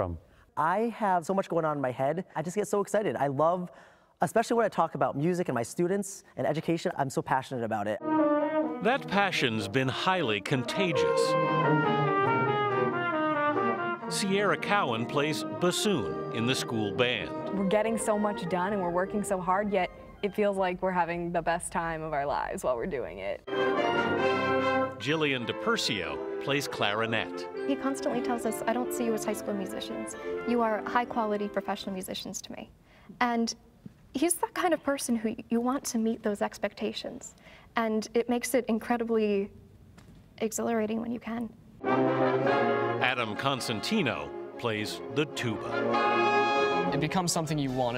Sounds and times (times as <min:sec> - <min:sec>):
Music: 0:07.8 - 0:32.6, 0:41.8 - 0:47.9.